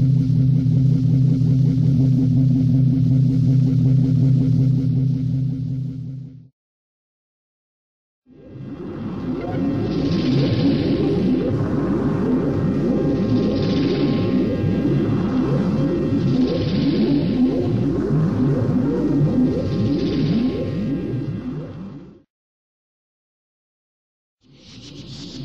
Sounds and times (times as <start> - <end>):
Sound effect: 0.0 - 6.5, 8.3 - 22.3, 24.4 - 25.4.